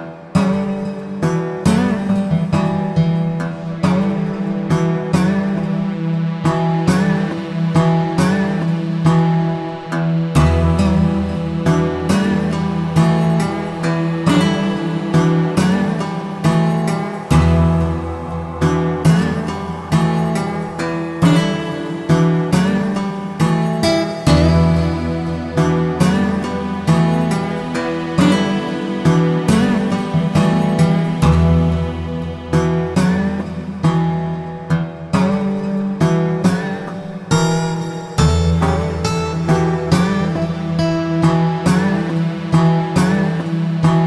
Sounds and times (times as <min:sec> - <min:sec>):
Music: 0:00.0 - 0:44.0.